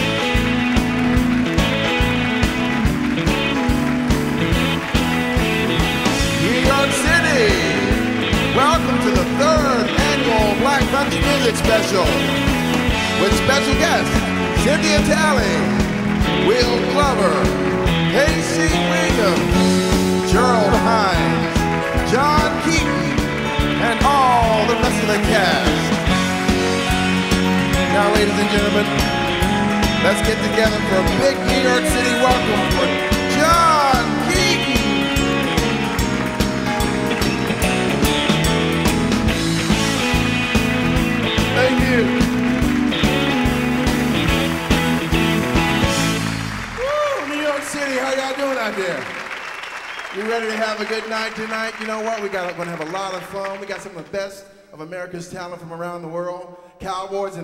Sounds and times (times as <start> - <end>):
Speech: 6.4 - 7.9, 8.5 - 12.2, 13.2 - 15.8, 16.4 - 19.6, 20.3 - 23.2, 23.8 - 25.9, 27.8 - 29.0, 30.0 - 34.9, 41.5 - 42.2, 46.9 - 49.2, 50.2 - 57.4.